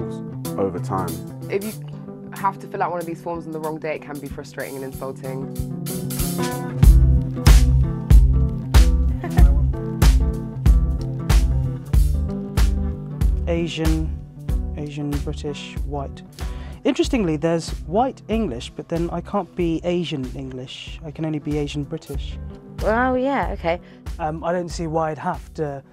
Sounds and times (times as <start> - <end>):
Music: 0.0 - 25.9
Speech: 0.6 - 1.8, 13.5 - 14.1, 16.9 - 25.8.